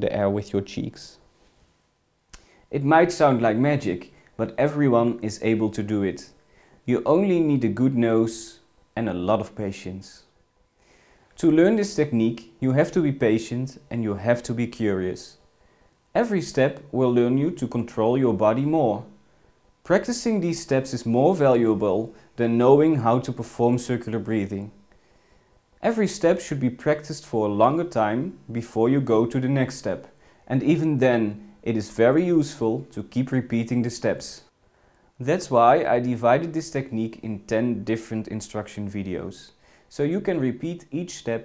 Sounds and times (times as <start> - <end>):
Speech: 0.0 - 1.2, 2.7 - 10.4, 11.4 - 15.4, 16.1 - 19.2, 19.8 - 24.8, 25.8 - 34.6, 35.2 - 41.4.